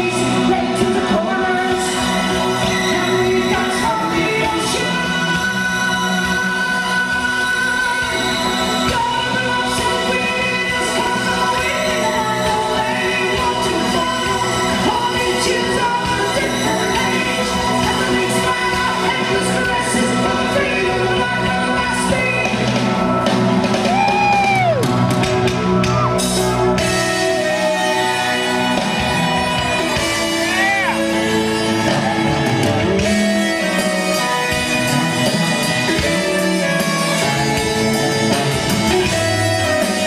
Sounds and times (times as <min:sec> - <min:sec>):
Singing: 0:00.0 - 0:24.8
Inside, large room or hall: 0:00.0 - 0:40.0
Music: 0:00.0 - 0:40.0.